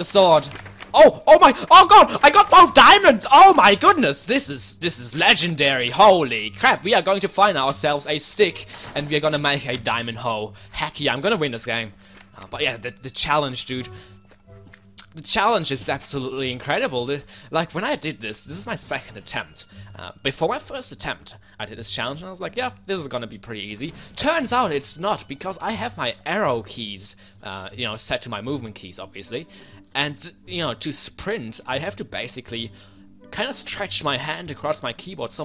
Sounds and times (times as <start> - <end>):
Speech: 0.0 - 13.9, 15.0 - 32.7, 33.3 - 35.4
Music: 0.0 - 35.4.